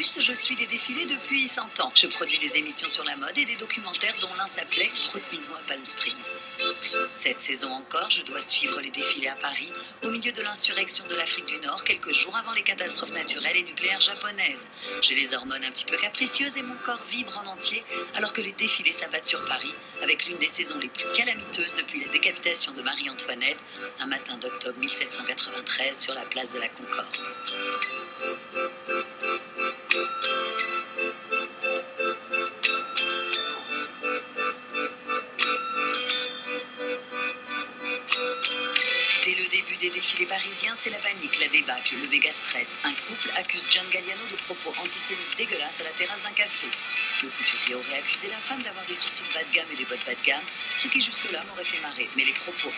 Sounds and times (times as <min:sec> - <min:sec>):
Speech: 0:00.0 - 0:06.3, 0:07.2 - 0:27.2, 0:39.2 - 0:52.7
Music: 0:00.0 - 0:52.7.